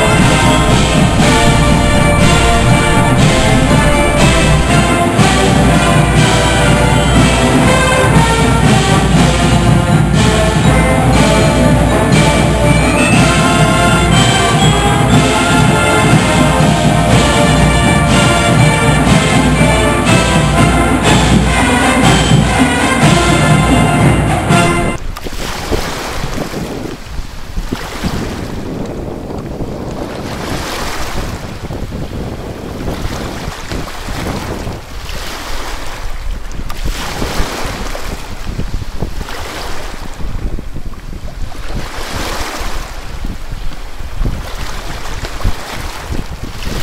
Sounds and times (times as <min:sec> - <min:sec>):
Sailboat, sailing ship: 0:00.0 - 0:46.8
Waves, surf: 0:00.0 - 0:46.8
Wind noise (microphone): 0:00.0 - 0:46.8.